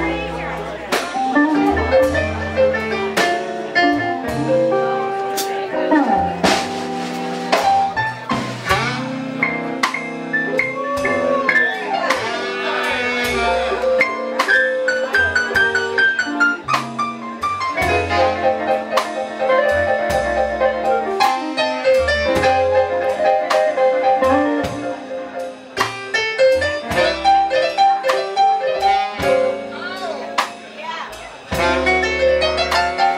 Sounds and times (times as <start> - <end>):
Speech: 0.0 - 4.4, 5.1 - 6.8, 10.6 - 18.6, 27.0 - 33.1
Music: 0.0 - 33.1.